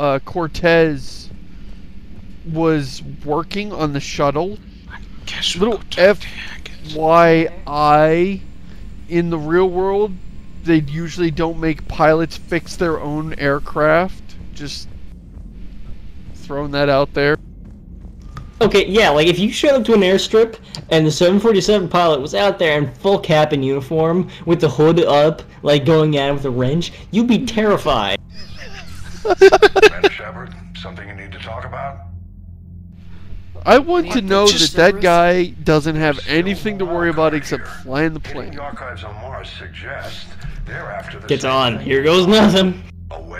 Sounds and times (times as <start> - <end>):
Speech: 0.0 - 1.3, 2.5 - 8.4, 9.1 - 14.9, 16.4 - 17.4, 18.6 - 28.2, 29.8 - 32.0, 33.6 - 43.3.